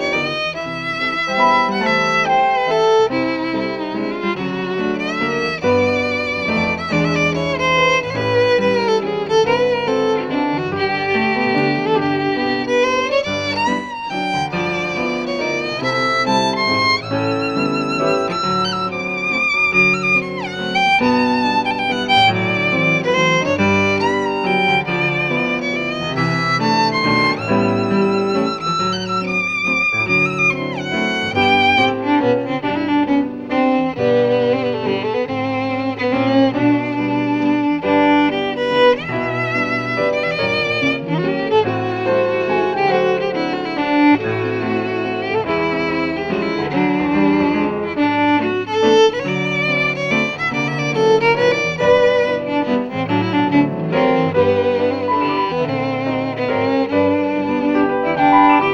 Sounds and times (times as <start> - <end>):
Violin, fiddle: 0.0 - 58.7.